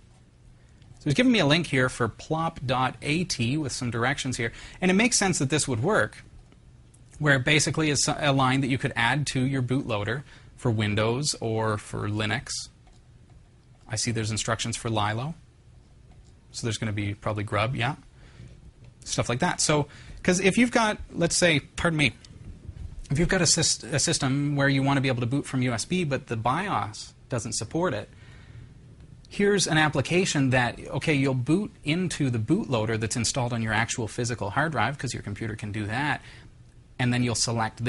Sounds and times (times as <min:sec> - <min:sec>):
Speech: 0:01.0 - 0:06.3, 0:07.2 - 0:12.8, 0:13.9 - 0:15.4, 0:16.5 - 0:18.1, 0:19.0 - 0:22.2, 0:23.1 - 0:28.1, 0:29.3 - 0:36.2, 0:37.0 - 0:37.8.